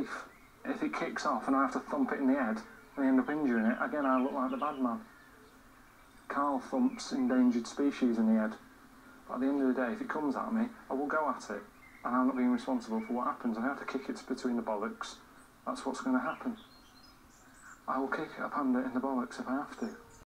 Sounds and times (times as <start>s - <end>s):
Speech: 0.0s - 5.1s, 6.3s - 8.6s, 9.3s - 16.6s, 17.8s - 20.1s.